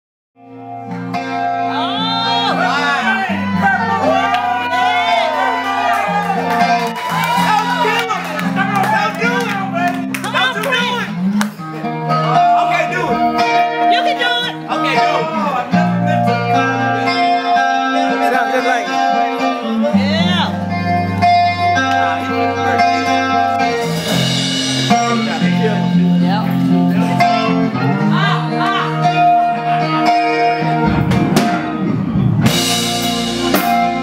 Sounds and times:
Music: 0.4 - 34.0
Speech: 13.9 - 16.4, 18.1 - 19.2, 24.9 - 29.0.

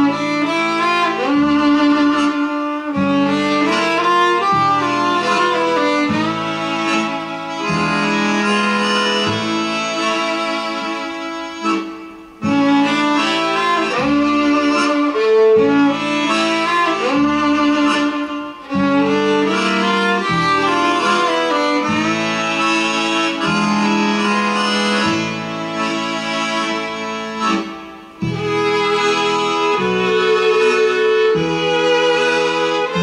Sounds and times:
Violin, fiddle: 0.0 - 33.0.

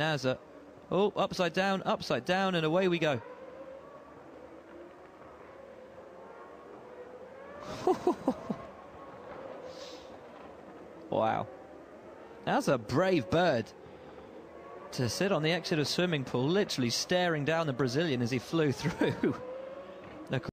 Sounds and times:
Speech: 0.0 - 3.2, 11.2 - 11.5, 12.5 - 13.7, 15.0 - 19.4, 20.3 - 20.5.

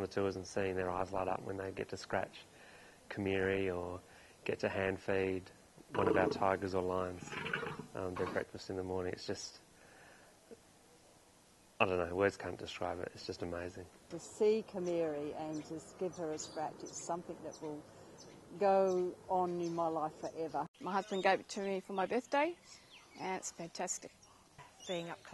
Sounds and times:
Speech: 0.0 - 2.4, 3.1 - 7.3, 8.0 - 9.6, 11.8 - 17.8, 18.6 - 22.6, 23.2 - 24.1, 24.9 - 25.3.

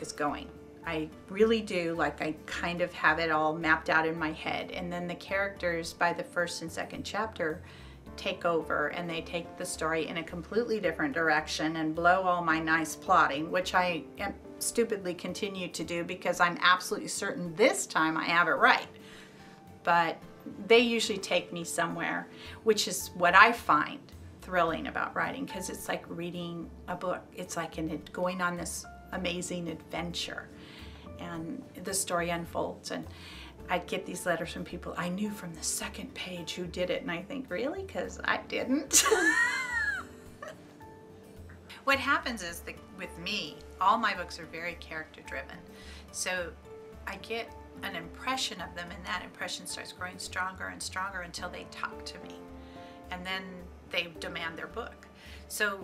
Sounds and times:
Speech: 0.0 - 7.6, 8.2 - 18.9, 19.8 - 30.5, 31.2 - 33.1, 33.7 - 38.9, 41.8 - 45.6, 46.2 - 52.4, 53.1 - 55.8
Music: 0.0 - 55.8.

